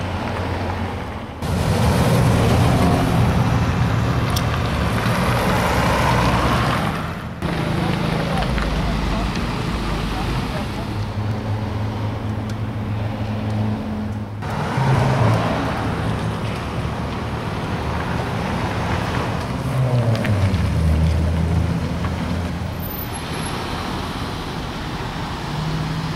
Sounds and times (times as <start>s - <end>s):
Vehicle: 0.0s - 26.1s.